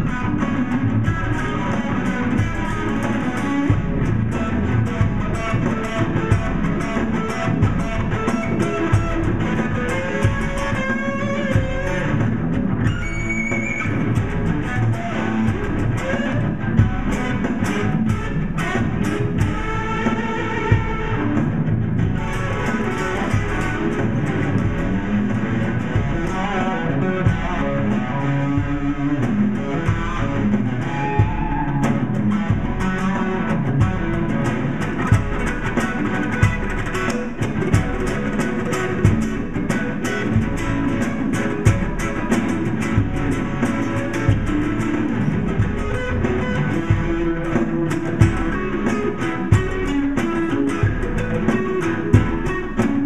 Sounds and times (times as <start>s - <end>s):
Blues: 0.0s - 53.0s
Distortion: 0.0s - 53.0s
Guitar: 0.0s - 53.0s
Rock and roll: 0.0s - 53.0s.